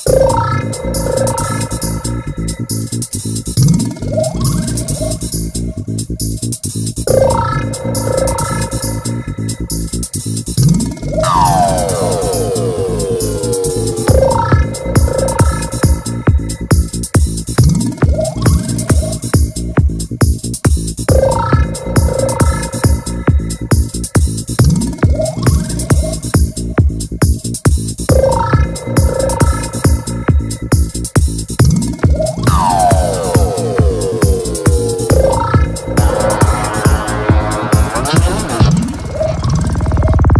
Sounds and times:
Music: 0.0 - 40.3.

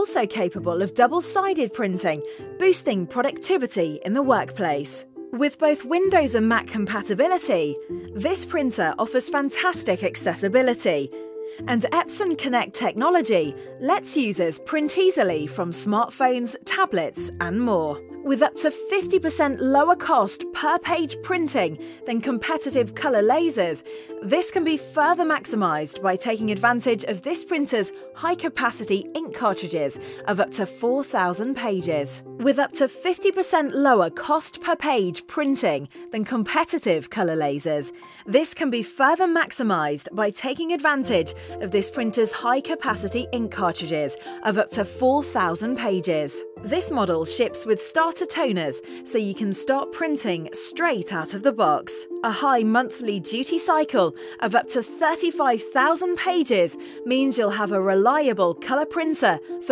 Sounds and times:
Speech: 0.0 - 11.1, 11.7 - 59.7
Music: 0.0 - 59.7.

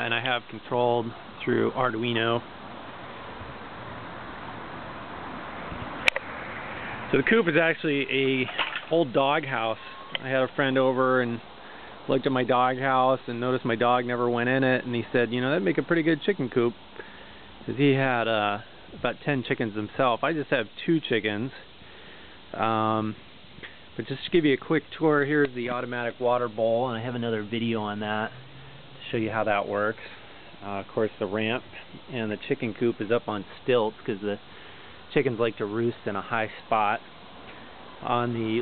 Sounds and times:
Speech: 0.0 - 2.5, 7.1 - 11.5, 12.1 - 16.8, 17.6 - 21.7, 22.6 - 23.2, 24.0 - 28.4, 29.0 - 34.4, 35.1 - 37.0, 38.0 - 38.6.

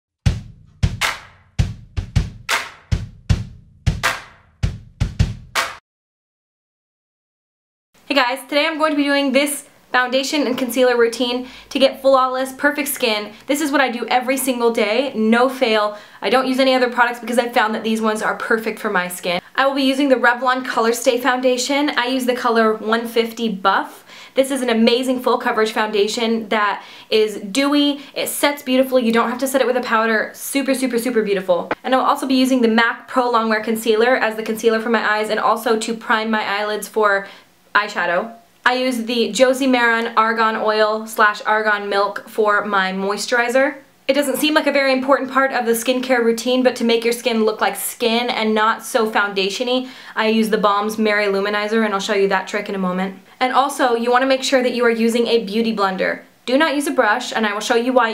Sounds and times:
Music: 0.2 - 5.8
Speech: 8.1 - 58.1.

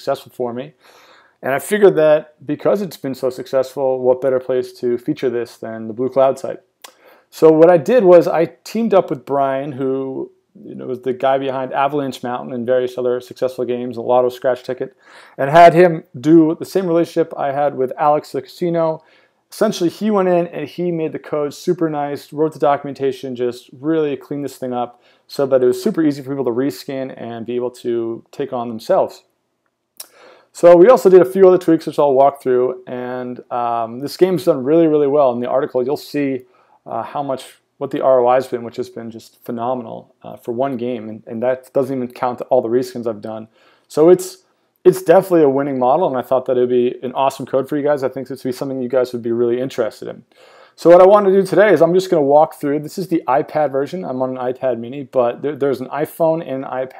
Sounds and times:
Speech: 0.0 - 0.8, 1.4 - 29.3, 30.5 - 56.9.

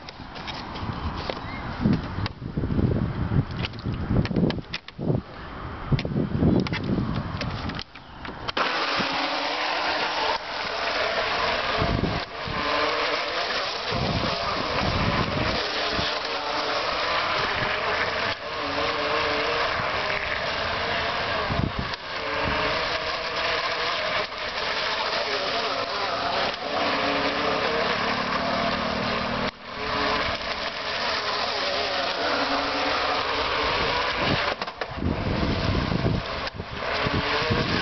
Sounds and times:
Motorboat, speedboat: 6.6 - 37.8.

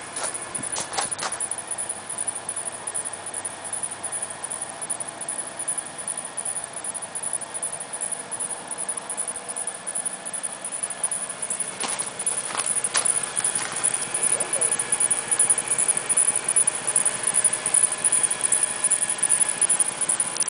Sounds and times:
Cacophony: 0.0 - 20.5
Speech: 14.3 - 14.8.

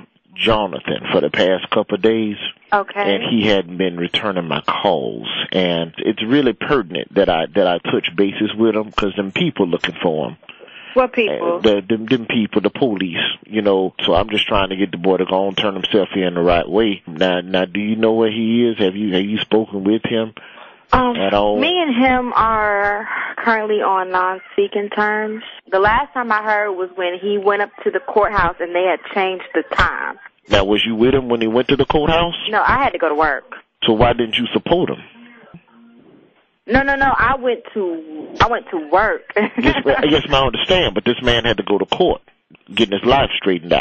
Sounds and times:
Speech: 0.0 - 10.4, 11.0 - 35.6, 36.7 - 43.8.

